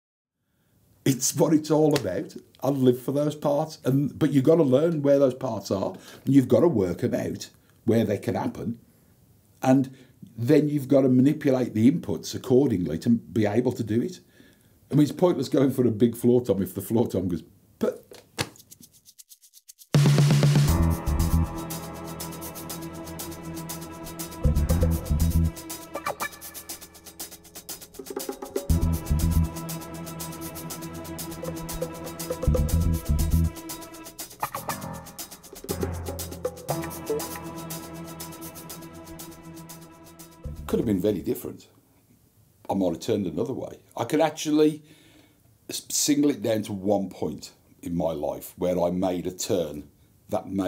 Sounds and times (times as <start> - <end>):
Music: 19.9 - 41.2.